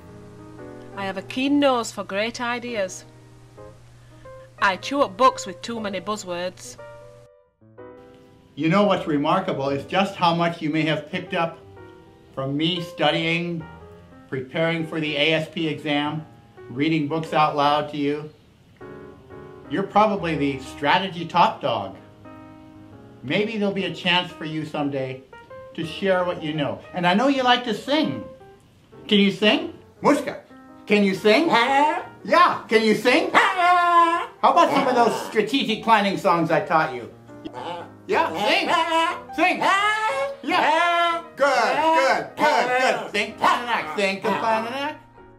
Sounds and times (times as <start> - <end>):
Music: 0.0 - 45.3
Speech: 8.6 - 11.6, 23.3 - 25.2, 25.8 - 28.2, 29.1 - 33.4, 34.4 - 37.1, 38.1 - 45.0.